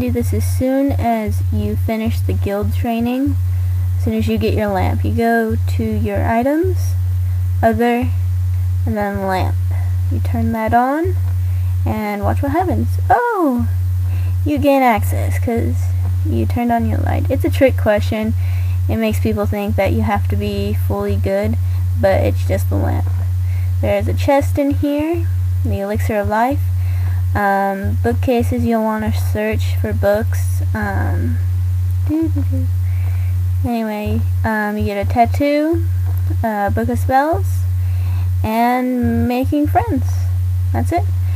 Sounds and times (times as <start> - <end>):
Speech: 0.0 - 3.4, 4.0 - 7.0, 7.6 - 8.2, 8.9 - 11.2, 11.8 - 13.8, 14.4 - 23.2, 23.8 - 26.7, 27.3 - 31.4, 32.0 - 32.7, 33.6 - 37.7, 38.4 - 41.1.